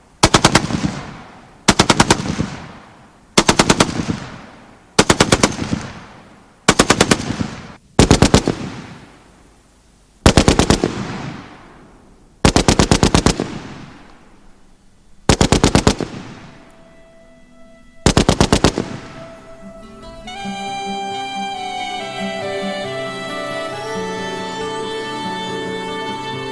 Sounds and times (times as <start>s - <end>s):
Machine gun: 0.2s - 2.8s, 3.4s - 6.1s, 6.7s - 9.0s, 10.3s - 11.6s, 12.4s - 14.0s, 15.3s - 16.6s, 18.1s - 19.1s.